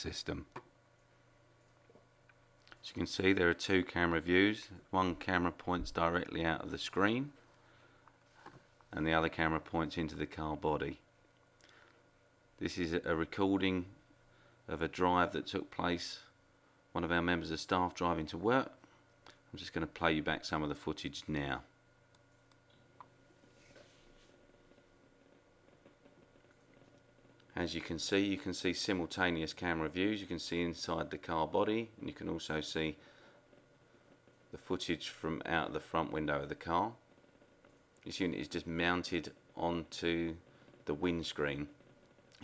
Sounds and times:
Speech: 0.0s - 0.6s, 2.7s - 7.4s, 8.9s - 11.1s, 12.6s - 14.0s, 14.7s - 16.4s, 17.0s - 18.8s, 19.5s - 21.7s, 27.5s - 33.0s, 34.5s - 37.0s, 38.0s - 41.8s.

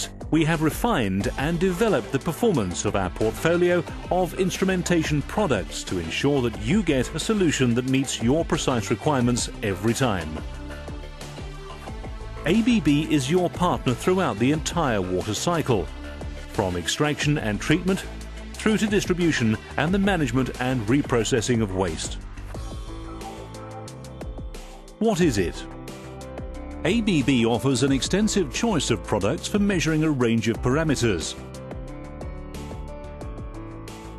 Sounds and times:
Speech: 0.0s - 10.4s, 12.5s - 15.9s, 16.6s - 22.2s, 25.0s - 25.7s, 26.8s - 31.4s
Music: 0.0s - 34.1s.

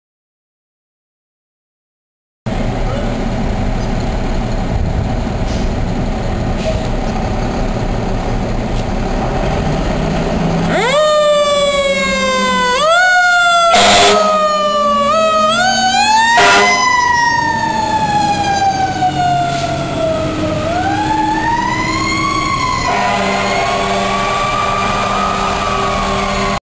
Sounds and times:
Truck: 2.5s - 26.6s
Fire engine, fire truck (siren): 9.4s - 26.6s.

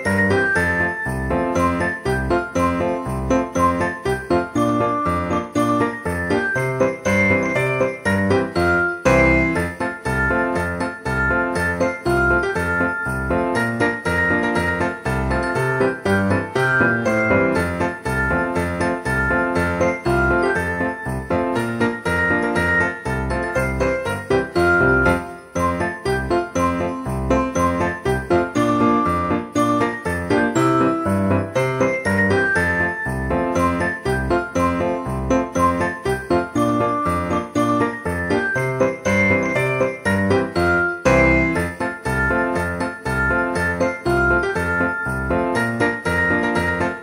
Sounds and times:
Music: 0.0s - 47.0s.

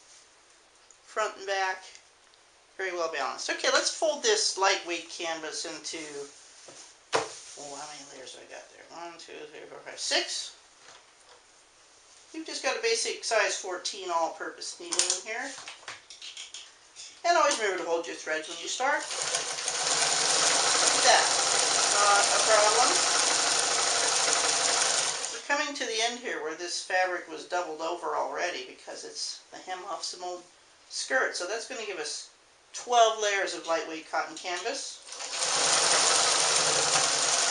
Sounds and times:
Speech: 1.1s - 2.0s, 2.8s - 6.4s, 7.6s - 10.6s, 12.3s - 15.6s, 17.0s - 19.1s, 20.9s - 23.0s, 25.4s - 35.0s
Sewing machine: 19.0s - 25.4s, 35.1s - 37.5s.

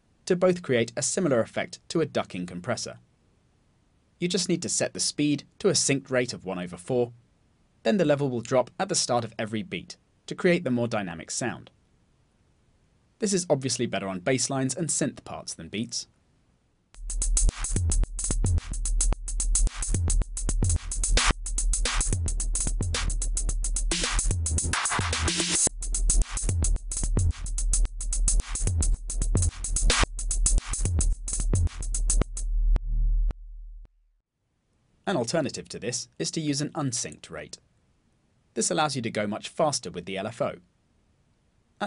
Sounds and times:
Speech: 0.3s - 3.0s, 4.2s - 7.2s, 7.9s - 11.8s, 13.2s - 16.1s, 35.1s - 37.6s, 38.6s - 40.7s
Drum machine: 17.0s - 33.4s
Electronic tuner: 17.0s - 34.0s
Effects unit: 17.0s - 34.2s.

